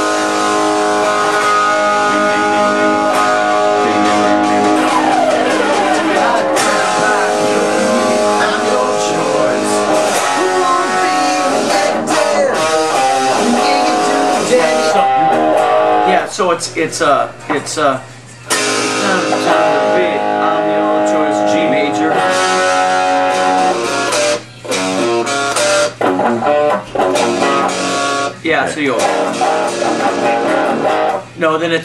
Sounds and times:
Electric guitar: 0:00.0 - 0:31.4
Strum: 0:00.0 - 0:31.4
Speech: 0:08.4 - 0:09.9, 0:16.1 - 0:18.0, 0:19.0 - 0:22.2, 0:28.4 - 0:29.1, 0:31.4 - 0:31.8.

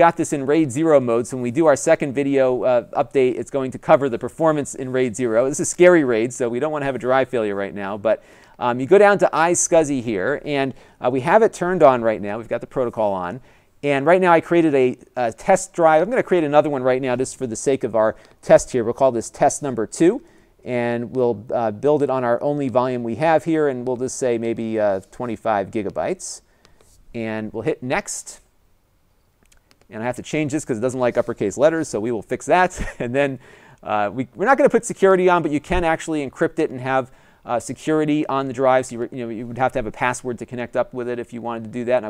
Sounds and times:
Speech: 0:00.0 - 0:26.4, 0:27.2 - 0:28.5, 0:29.9 - 0:42.1.

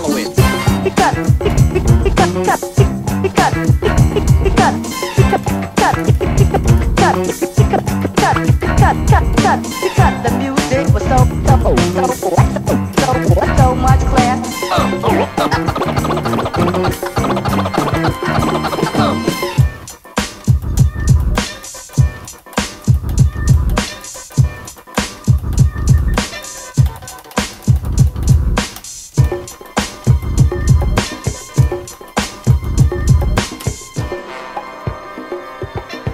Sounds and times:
Funk: 0:00.0 - 0:36.1
Scratching (performance technique): 0:00.0 - 0:36.1.

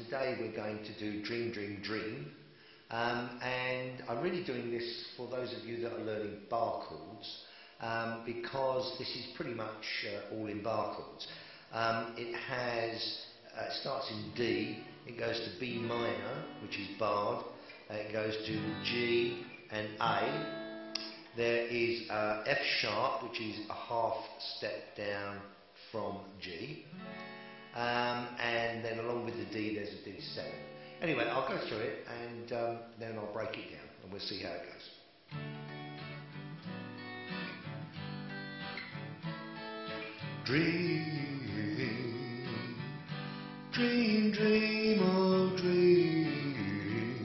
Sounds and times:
Speech: 0:00.0 - 0:20.5, 0:21.4 - 0:26.9, 0:27.8 - 0:35.0
Acoustic guitar: 0:00.0 - 0:33.7, 0:35.1 - 0:47.2
Strum: 0:13.8 - 0:22.1, 0:35.3 - 0:47.2.

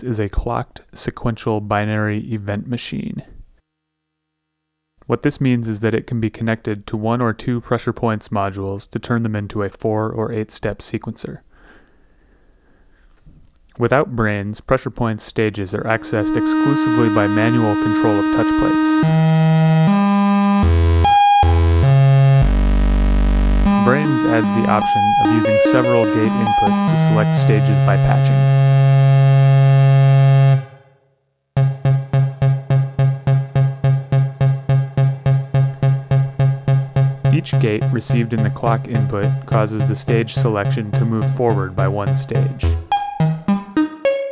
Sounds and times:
Speech: 0:00.0 - 0:03.4, 0:05.0 - 0:11.4, 0:13.8 - 0:19.0, 0:23.7 - 0:28.5, 0:37.3 - 0:42.8
Music: 0:15.9 - 0:30.9, 0:31.6 - 0:44.3.

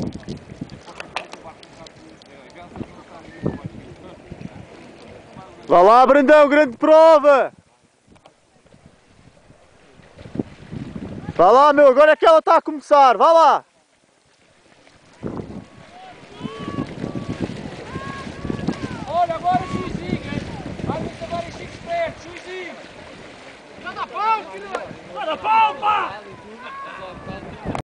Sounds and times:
Outside, rural or natural: 0:00.0 - 0:27.8.

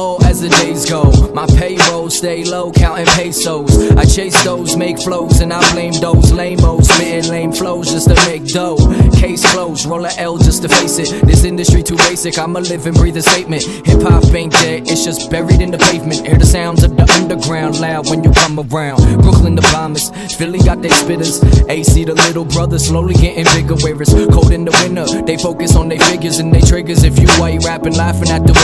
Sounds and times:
Music: 0:00.0 - 0:28.6.

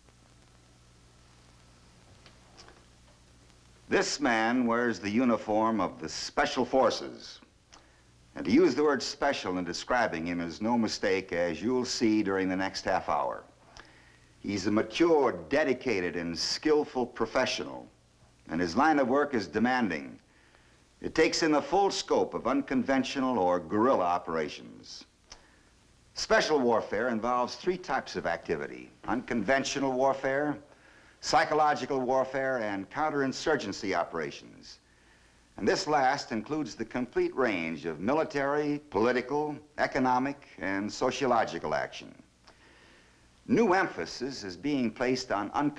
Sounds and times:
Speech: 0:03.9 - 0:07.5, 0:08.4 - 0:13.6, 0:14.4 - 0:20.2, 0:21.0 - 0:25.1, 0:26.2 - 0:34.8, 0:35.6 - 0:42.3, 0:43.5 - 0:45.7.

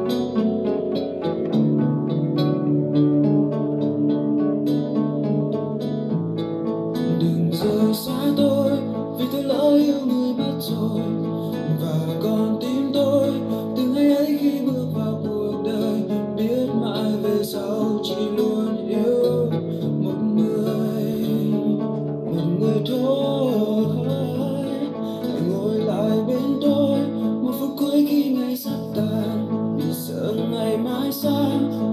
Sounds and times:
Acoustic guitar: 0:00.0 - 0:31.9
Strum: 0:00.0 - 0:31.9.

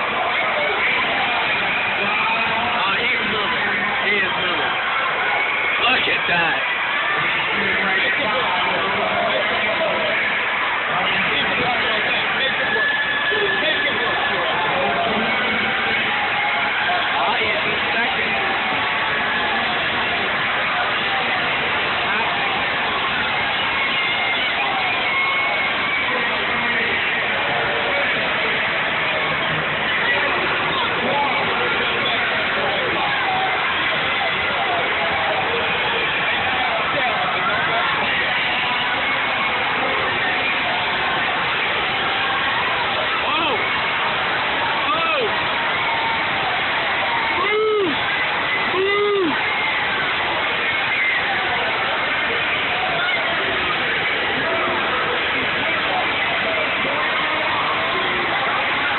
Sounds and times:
Speech: 0:00.0 - 0:44.0, 0:44.6 - 0:58.9.

